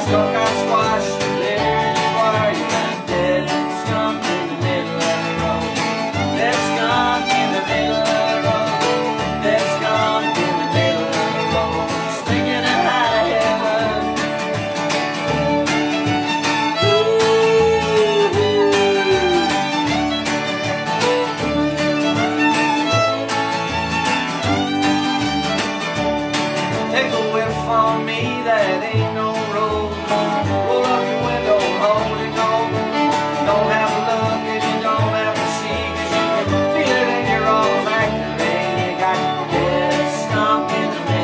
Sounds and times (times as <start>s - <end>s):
Singing: 0.0s - 14.2s, 16.8s - 19.8s, 26.9s - 41.2s
Bluegrass: 0.0s - 41.2s
Bowed string instrument: 0.0s - 41.2s.